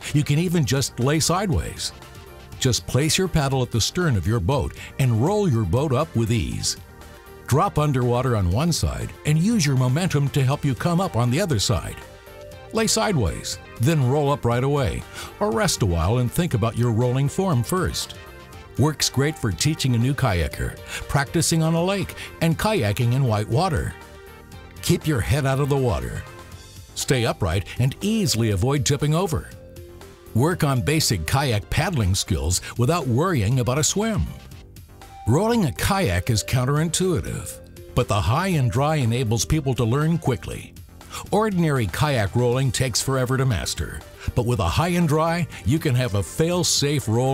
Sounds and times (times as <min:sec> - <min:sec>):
Speech: 0:00.0 - 0:01.9, 0:02.6 - 0:06.8, 0:07.5 - 0:12.0, 0:12.7 - 0:18.2, 0:18.8 - 0:24.0, 0:24.8 - 0:26.3, 0:27.0 - 0:29.6, 0:30.4 - 0:34.4, 0:35.3 - 0:47.3
Music: 0:00.0 - 0:47.3.